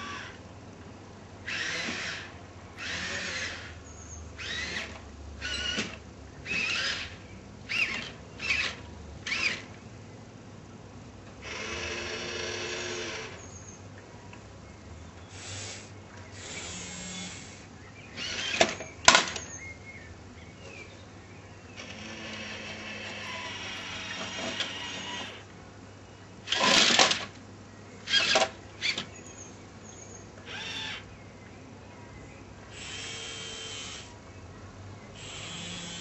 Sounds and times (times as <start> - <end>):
Electric shaver, electric razor: 2.8 - 3.6, 16.4 - 17.5, 32.8 - 34.1, 35.2 - 36.0.